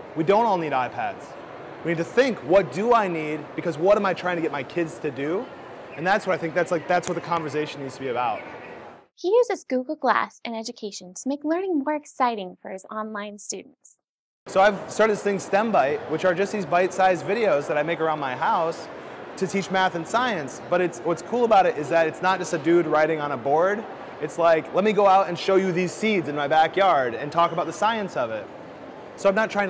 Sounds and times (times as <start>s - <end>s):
Speech: 9.2s - 13.7s.